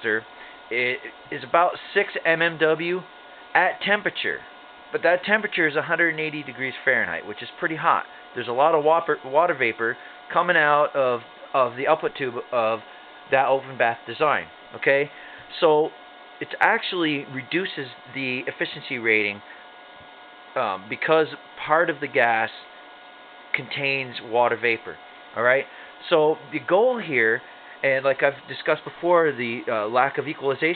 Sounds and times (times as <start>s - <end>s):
Speech: 0.0s - 19.5s, 20.6s - 22.7s, 23.6s - 30.7s.